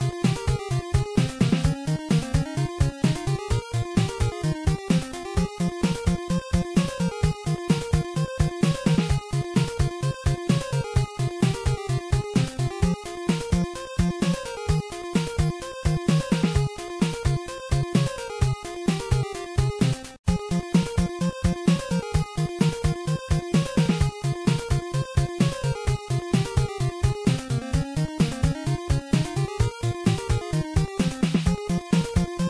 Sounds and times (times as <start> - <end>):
Music: 0.0 - 32.5.